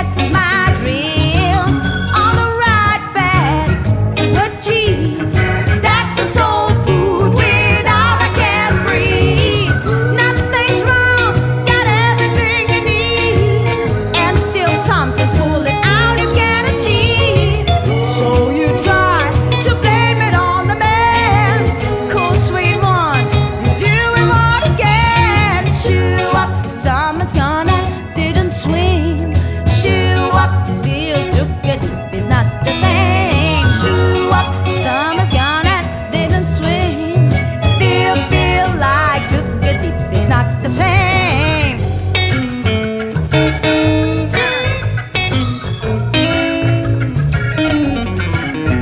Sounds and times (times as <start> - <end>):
Singing: 5.8 - 22.8, 29.7 - 41.6.